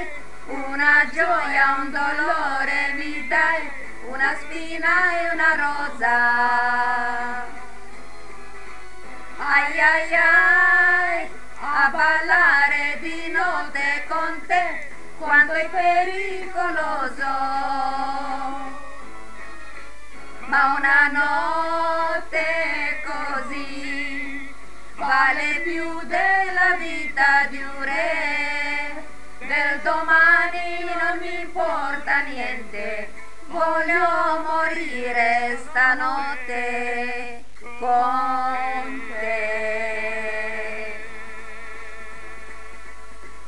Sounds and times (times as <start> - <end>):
Singing: 0.0 - 43.4.